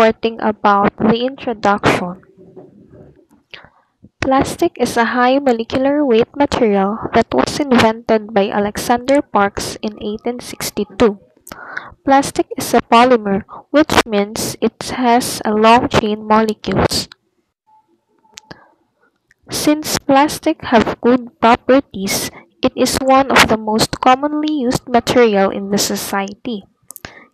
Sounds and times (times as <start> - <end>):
Speech: 0.0 - 17.2, 19.5 - 27.3.